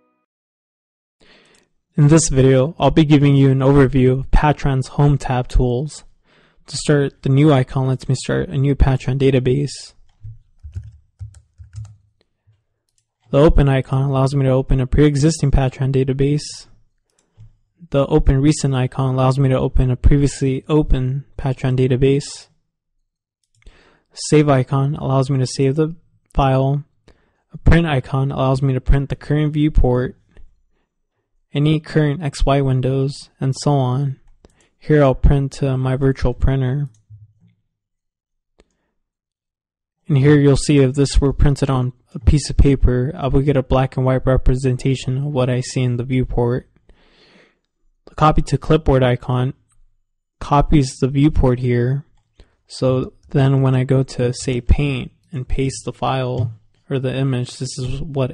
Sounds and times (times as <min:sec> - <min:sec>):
Speech: 0:02.0 - 0:06.1, 0:06.7 - 0:10.0, 0:13.3 - 0:16.8, 0:17.8 - 0:22.6, 0:24.2 - 0:26.9, 0:27.5 - 0:30.3, 0:31.5 - 0:34.2, 0:34.8 - 0:37.0, 0:40.0 - 0:46.8, 0:48.1 - 0:49.6, 0:50.4 - 0:52.1, 0:52.7 - 0:58.3.